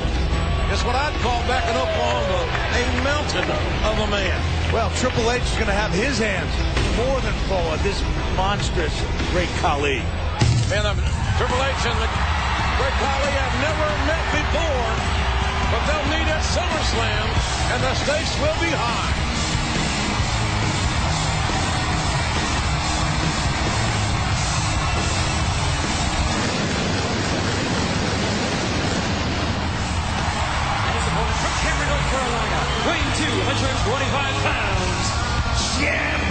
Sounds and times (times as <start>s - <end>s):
Inside, large room or hall: 0.0s - 36.3s
Music: 0.0s - 36.3s
Speech: 10.7s - 12.2s, 12.8s - 15.0s, 15.7s - 19.2s, 31.0s - 36.3s.